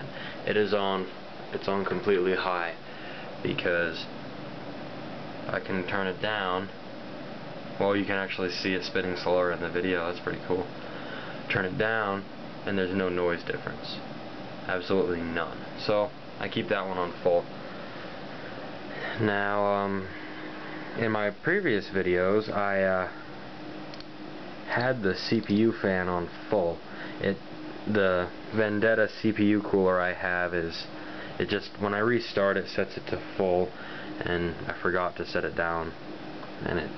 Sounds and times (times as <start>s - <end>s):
Speech: 0.0s - 2.8s, 3.4s - 4.1s, 5.5s - 6.8s, 7.8s - 10.7s, 11.5s - 17.5s, 19.2s - 20.1s, 21.0s - 23.2s, 24.7s - 36.0s, 36.6s - 36.9s
White noise: 0.0s - 36.9s.